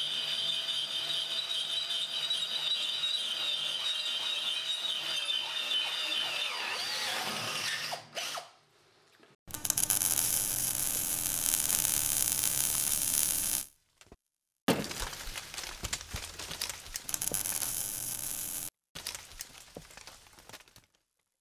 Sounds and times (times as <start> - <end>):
Drill: 0.0 - 8.5, 9.5 - 13.7, 17.1 - 18.7.